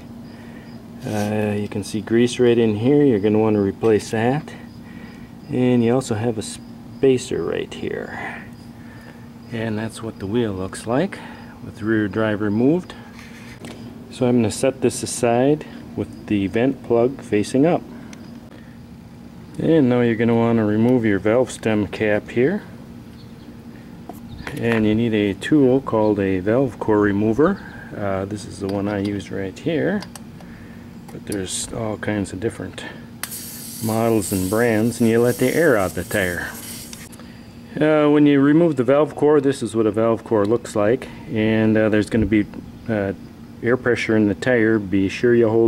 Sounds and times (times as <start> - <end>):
Speech: 1.0 - 4.6, 5.5 - 8.4, 9.5 - 13.0, 14.1 - 17.8, 19.6 - 22.7, 24.4 - 30.1, 31.1 - 33.0, 33.8 - 36.6, 37.7 - 45.6.